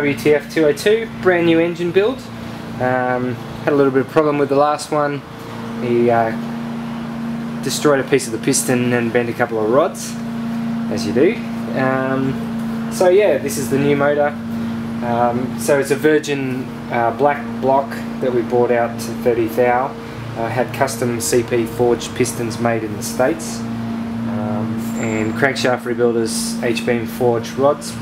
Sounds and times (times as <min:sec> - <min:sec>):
Speech: 0:00.0 - 0:06.4, 0:07.6 - 0:10.2, 0:10.9 - 0:14.4, 0:15.0 - 0:23.7, 0:24.3 - 0:28.0
Idling: 0:00.0 - 0:28.0
Medium engine (mid frequency): 0:00.0 - 0:28.0.